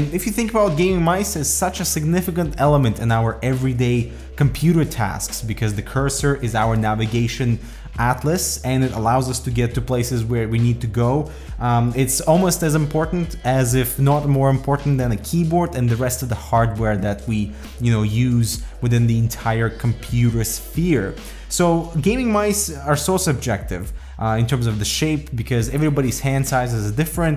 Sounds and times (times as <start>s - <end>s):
Music: 0.0s - 27.3s
Speech: 0.0s - 27.3s.